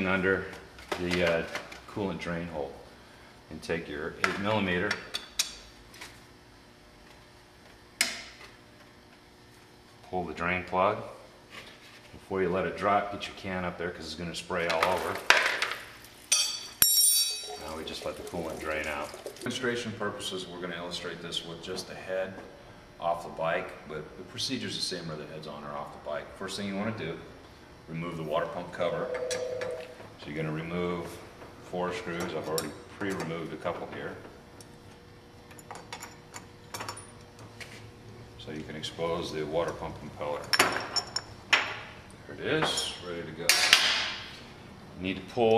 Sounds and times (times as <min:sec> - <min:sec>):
Speech: 0:00.0 - 0:02.8, 0:03.5 - 0:05.0, 0:10.1 - 0:11.2, 0:12.2 - 0:15.3, 0:17.6 - 0:27.3, 0:27.9 - 0:29.1, 0:30.2 - 0:34.3, 0:38.4 - 0:40.5, 0:42.3 - 0:43.6, 0:45.0 - 0:45.5.